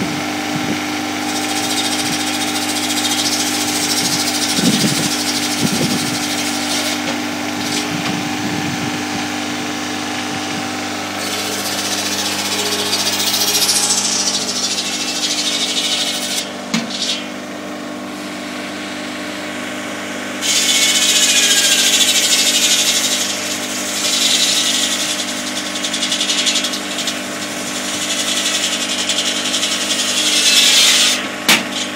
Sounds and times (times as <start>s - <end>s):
Power tool: 0.0s - 31.9s.